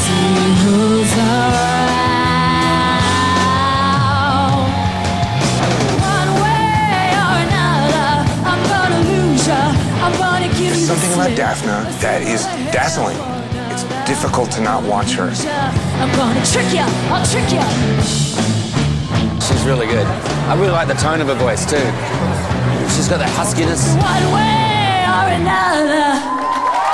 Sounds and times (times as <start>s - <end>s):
Music: 0.0s - 26.9s
Speech: 19.5s - 22.0s.